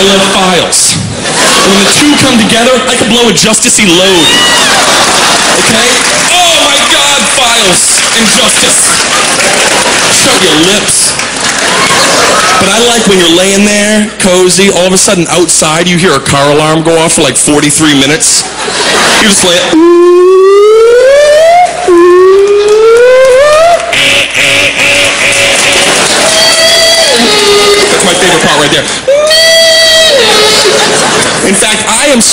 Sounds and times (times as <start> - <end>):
Speech: 0.0 - 1.0, 1.7 - 4.4, 5.7 - 9.0, 10.2 - 11.2, 12.6 - 18.5, 19.2 - 19.8, 27.1 - 28.9, 31.4 - 32.3.